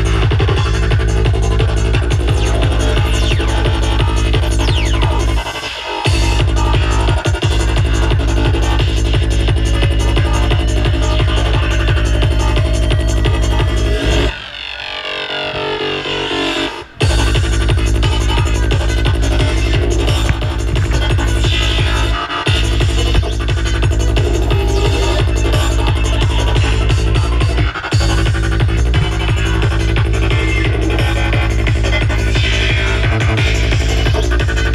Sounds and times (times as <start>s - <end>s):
Trance music: 0.0s - 34.7s.